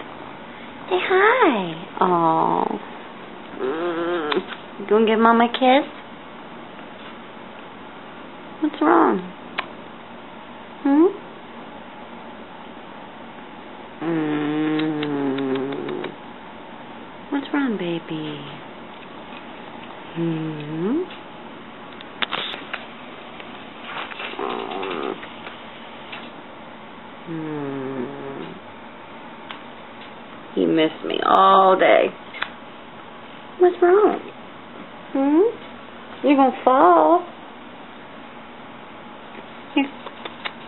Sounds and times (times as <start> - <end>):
Speech: 0.9 - 2.8, 4.8 - 6.0, 8.6 - 9.3, 17.3 - 18.6, 30.6 - 32.2, 33.6 - 34.4, 35.2 - 35.6, 36.2 - 37.3, 39.8 - 40.0.